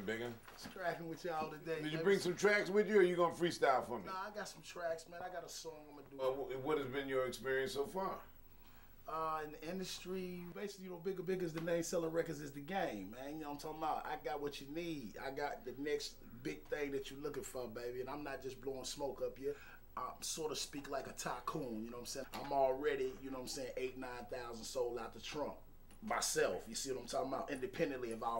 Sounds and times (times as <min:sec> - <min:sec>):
Speech: 0:00.0 - 0:08.3, 0:09.1 - 0:28.3.